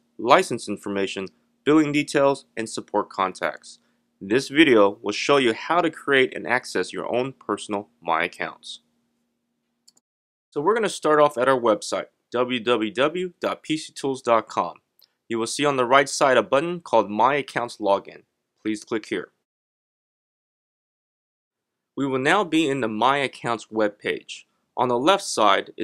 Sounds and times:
Speech: 0.2 - 8.8, 10.6 - 19.5, 22.0 - 25.8.

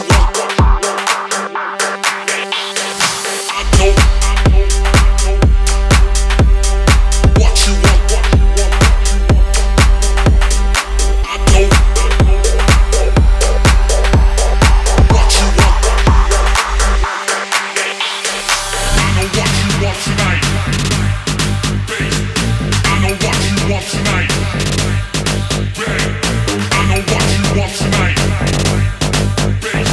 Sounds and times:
Music: 0.0 - 29.9.

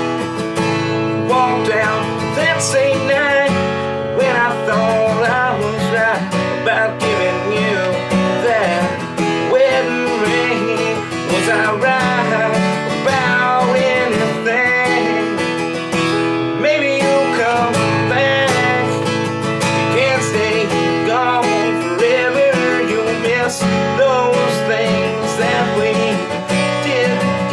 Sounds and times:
Acoustic guitar: 0.0 - 27.5
Strum: 0.0 - 27.5
Singing: 4.2 - 15.5, 19.9 - 27.5.

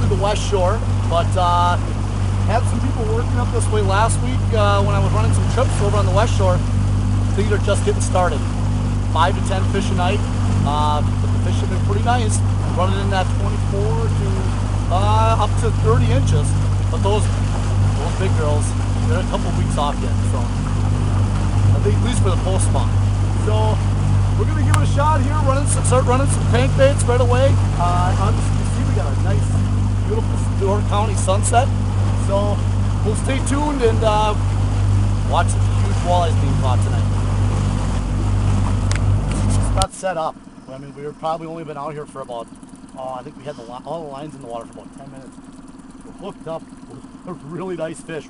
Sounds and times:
Speech: 0.0 - 1.8, 2.5 - 6.6, 7.4 - 8.4, 9.2 - 17.3, 18.0 - 20.5, 21.8 - 23.8, 24.4 - 34.4, 35.3 - 37.1, 39.4 - 45.4, 46.1 - 48.3
Vehicle: 0.0 - 48.3.

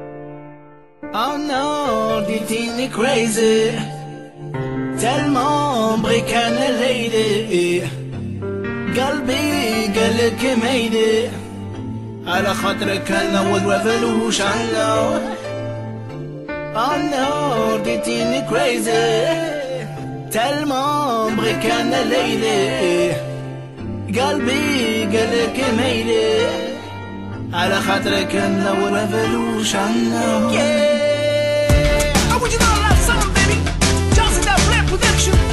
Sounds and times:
Music: 0.0 - 35.5.

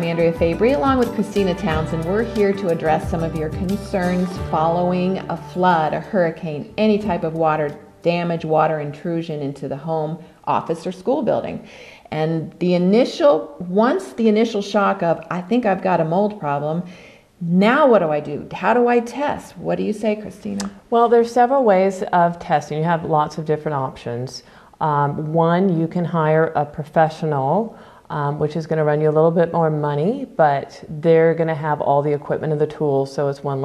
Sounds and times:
Speech: 0.0 - 33.6.

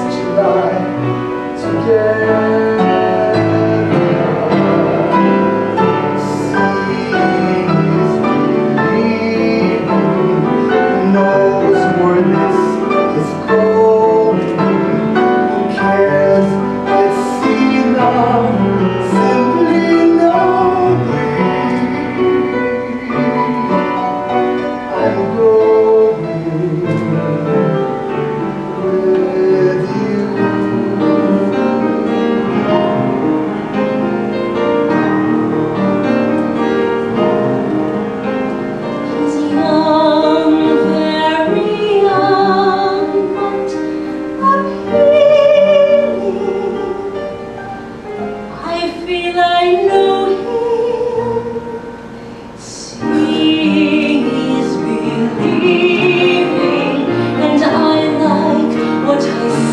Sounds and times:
Classical music: 0.0 - 59.7.

